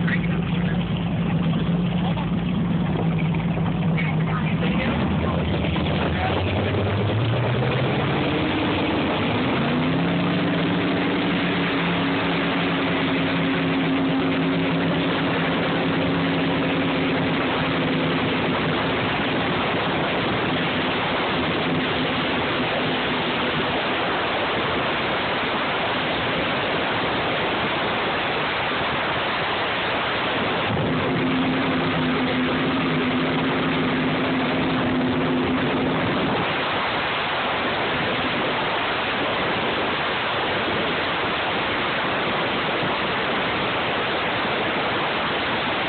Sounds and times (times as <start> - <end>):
Motorboat, speedboat: 0.0 - 45.8.